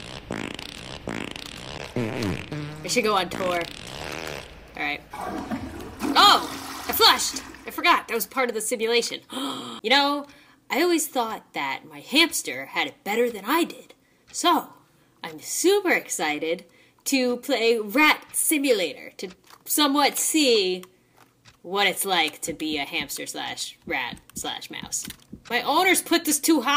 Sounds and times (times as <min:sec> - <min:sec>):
Speech: 0:02.9 - 0:03.7, 0:04.8 - 0:05.0, 0:06.2 - 0:20.9, 0:21.7 - 0:26.7.